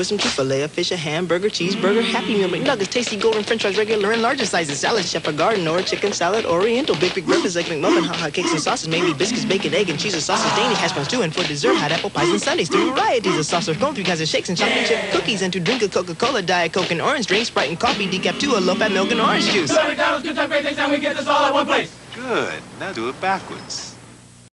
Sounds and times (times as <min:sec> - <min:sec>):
Speech: 0:00.0 - 0:19.8, 0:22.2 - 0:24.0.